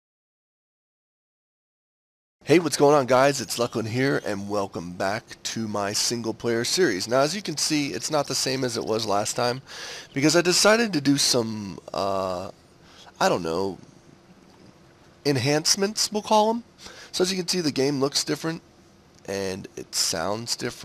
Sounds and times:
Speech: 2.4s - 12.6s, 13.2s - 13.8s, 15.2s - 18.6s, 19.2s - 20.8s.

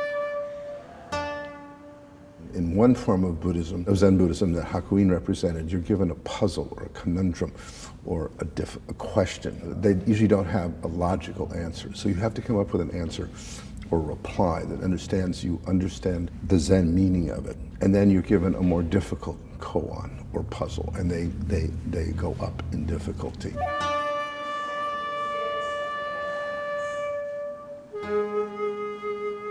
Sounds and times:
Music: 0.0s - 3.3s, 23.6s - 29.5s
Speech: 2.5s - 23.6s.

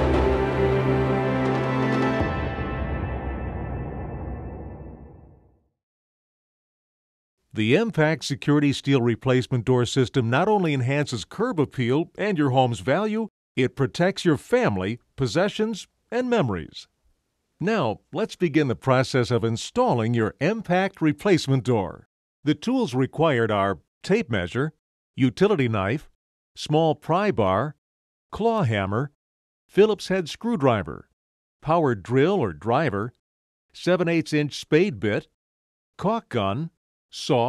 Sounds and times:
Speech: 7.5s - 16.9s, 17.6s - 27.8s, 28.4s - 33.2s, 33.8s - 35.4s, 36.0s - 37.4s.

